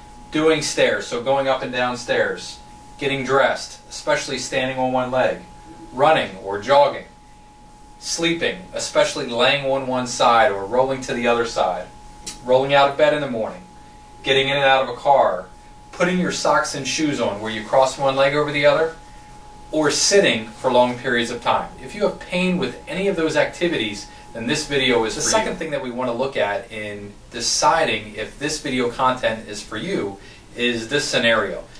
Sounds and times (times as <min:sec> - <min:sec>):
Speech: 0:00.3 - 0:07.2, 0:08.0 - 0:13.7, 0:14.3 - 0:19.0, 0:19.8 - 0:31.7.